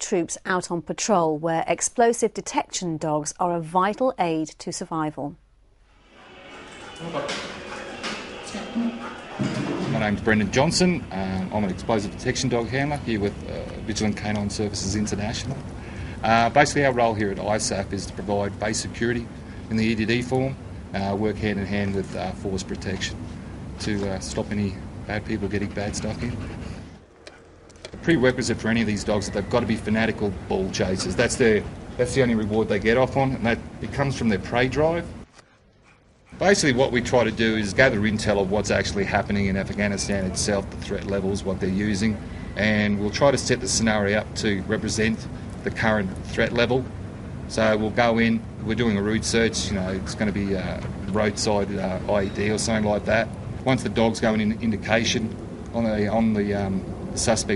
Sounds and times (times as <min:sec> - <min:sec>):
Speech: 0:00.0 - 0:05.4, 0:09.8 - 0:15.6, 0:16.2 - 0:23.2, 0:23.8 - 0:26.4, 0:28.0 - 0:35.1, 0:36.4 - 0:46.9, 0:47.5 - 0:57.5.